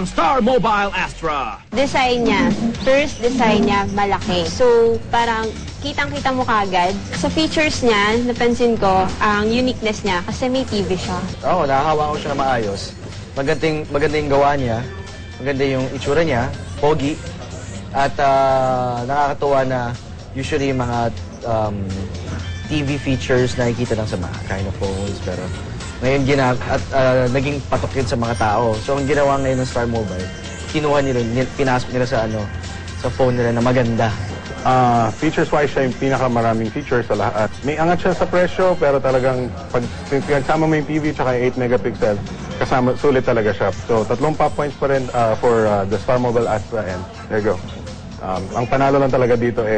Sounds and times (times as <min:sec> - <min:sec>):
Music: 0:00.0 - 0:49.7.